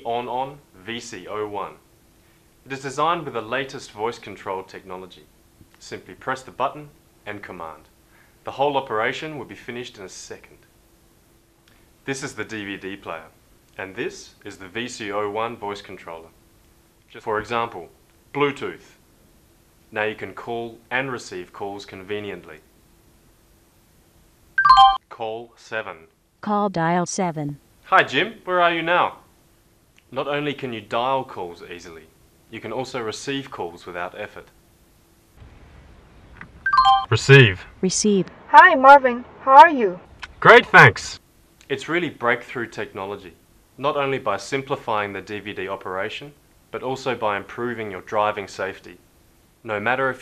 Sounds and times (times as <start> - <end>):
Speech: 0.0 - 1.8, 2.7 - 7.9, 8.5 - 10.6, 12.1 - 16.3, 17.1 - 19.0, 20.0 - 22.6, 25.1 - 29.2, 30.1 - 34.5, 37.1 - 49.0, 49.7 - 50.2.